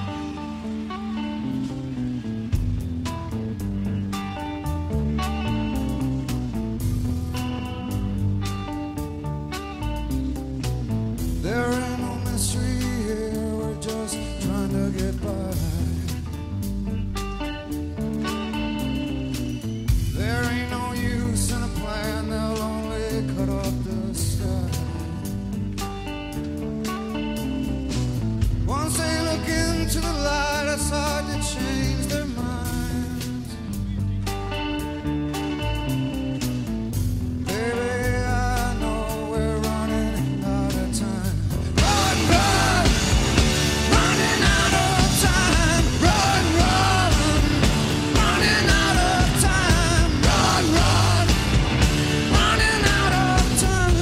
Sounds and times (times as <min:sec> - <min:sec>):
Music: 0:00.0 - 0:54.0.